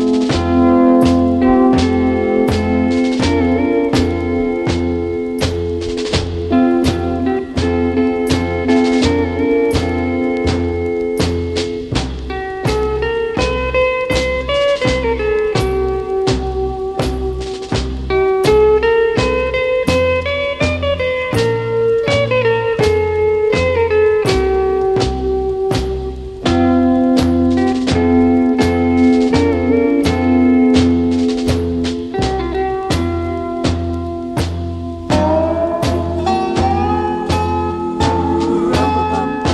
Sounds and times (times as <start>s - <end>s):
Electric guitar: 0.0s - 39.5s.